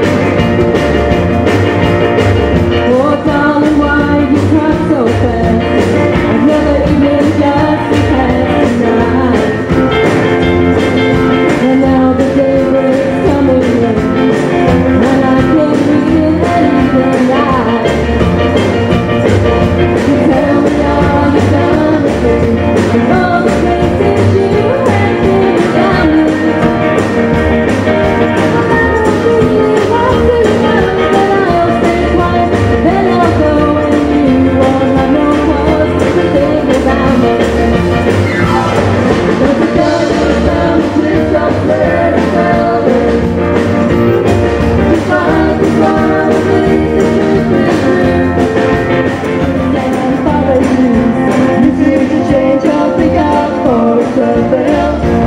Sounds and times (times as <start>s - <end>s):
Rock and roll: 0.0s - 55.2s.